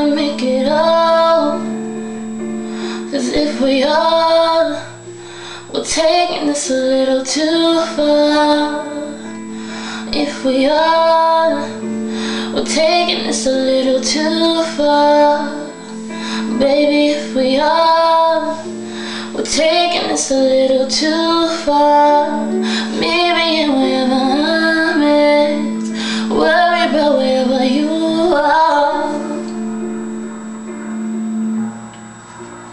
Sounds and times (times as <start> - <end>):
Music: 0.0 - 32.7.